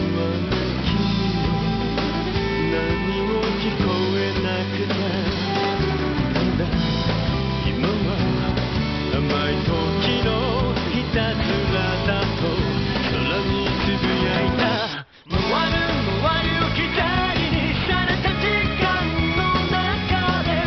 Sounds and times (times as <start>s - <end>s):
Music: 0.0s - 20.6s
Male singing: 2.4s - 6.7s, 7.6s - 20.6s.